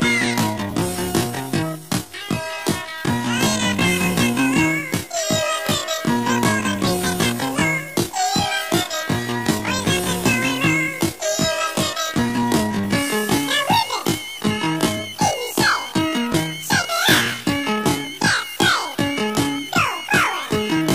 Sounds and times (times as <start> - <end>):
Music: 0.0 - 20.9.